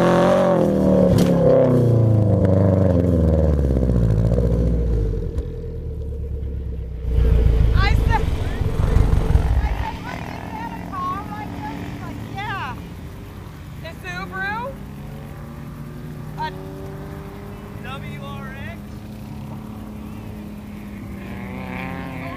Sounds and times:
Car: 0:00.0 - 0:22.3
Outside, rural or natural: 0:00.0 - 0:22.3.

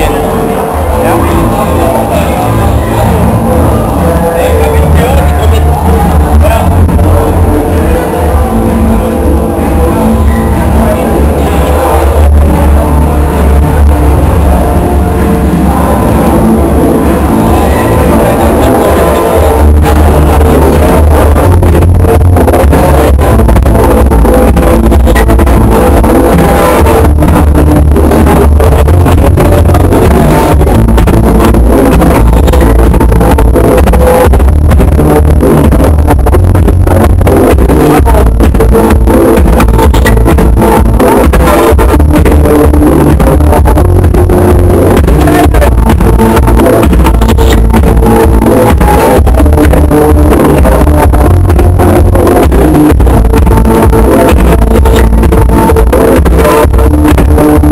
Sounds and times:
Electronic music: 0:00.0 - 0:57.7.

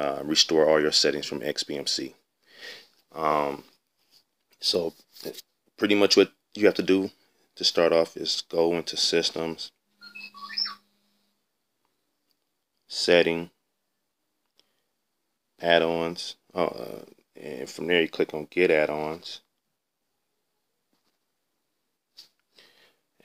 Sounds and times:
Speech: 0:00.0 - 0:02.2, 0:03.1 - 0:03.7, 0:04.6 - 0:09.8, 0:12.9 - 0:13.6, 0:15.6 - 0:19.5.

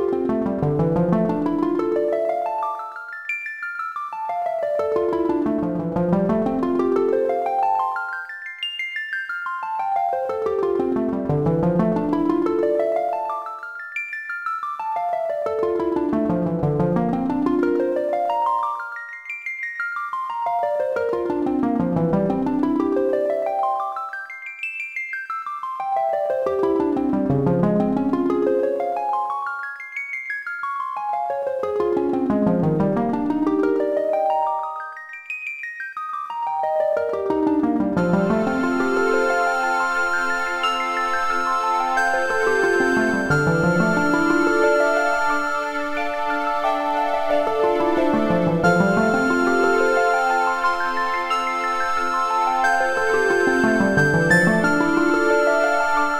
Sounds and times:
Glockenspiel: 0:00.0 - 0:56.1.

